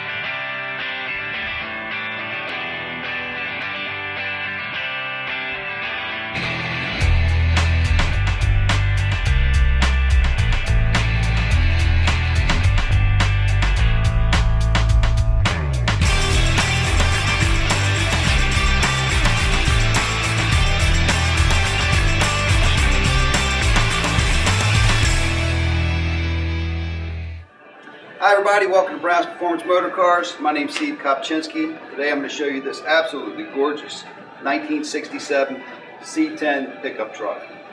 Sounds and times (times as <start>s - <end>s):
Music: 0.0s - 37.7s
Speech: 28.2s - 37.5s.